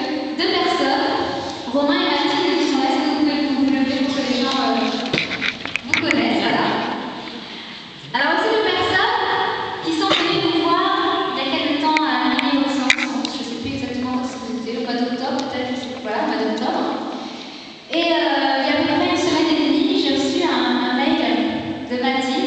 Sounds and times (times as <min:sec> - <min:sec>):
Speech: 0:00.0 - 0:05.1, 0:05.8 - 0:07.1, 0:08.0 - 0:17.0, 0:17.9 - 0:22.4.